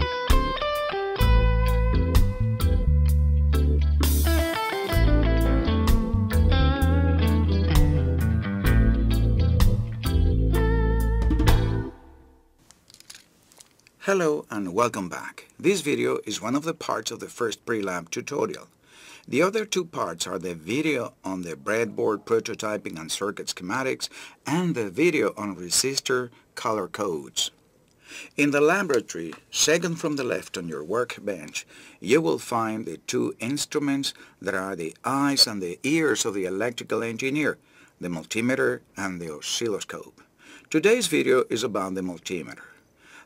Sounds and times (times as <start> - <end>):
Narration, monologue: 12.6 - 43.2.